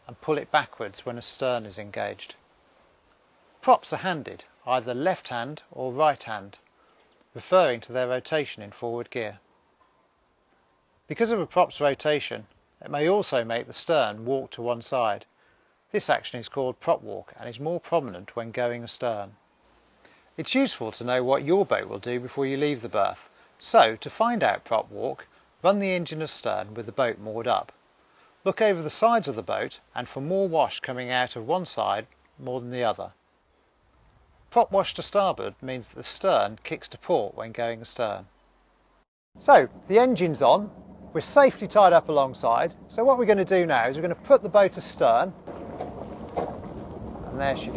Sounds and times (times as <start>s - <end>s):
Speech: 0.0s - 2.4s, 3.6s - 6.6s, 7.4s - 9.4s, 11.1s - 15.3s, 15.9s - 19.4s, 20.4s - 27.8s, 28.4s - 33.2s, 34.5s - 38.3s, 39.4s - 45.4s, 47.3s - 47.7s.